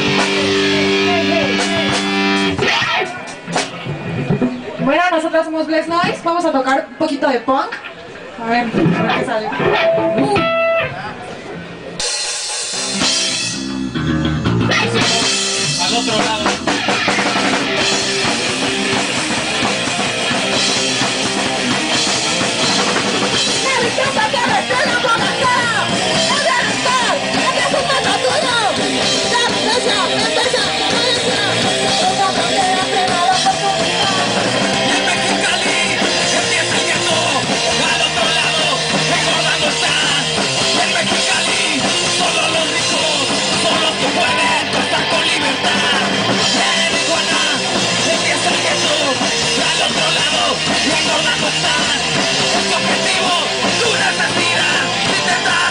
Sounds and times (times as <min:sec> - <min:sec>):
Music: 0:00.0 - 0:06.0, 0:09.6 - 0:55.7.